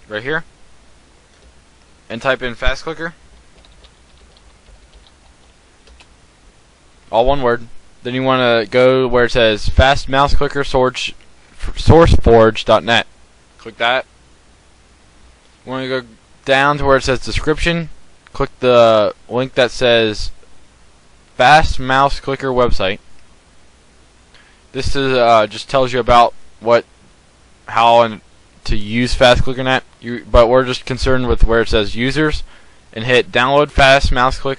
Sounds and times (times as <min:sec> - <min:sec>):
Speech: 0:00.0 - 0:00.5, 0:02.1 - 0:03.2, 0:07.1 - 0:14.1, 0:15.6 - 0:20.4, 0:21.4 - 0:23.0, 0:24.8 - 0:26.9, 0:27.7 - 0:34.5.